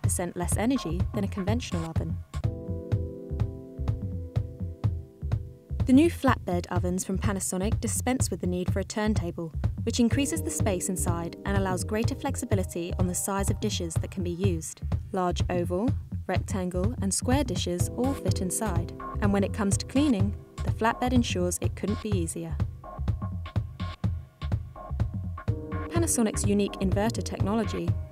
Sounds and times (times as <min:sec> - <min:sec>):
Speech: 0:00.0 - 0:02.2, 0:05.8 - 0:22.6, 0:25.9 - 0:28.0
Music: 0:00.0 - 0:28.1.